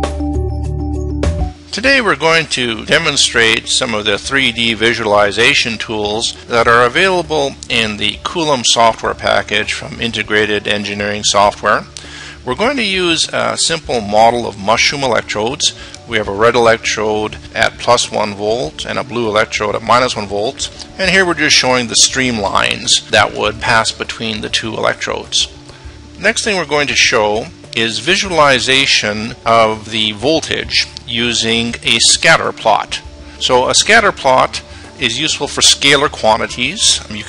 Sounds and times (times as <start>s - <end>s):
Music: 0.0s - 37.2s
Speech: 1.7s - 25.6s, 26.2s - 37.2s.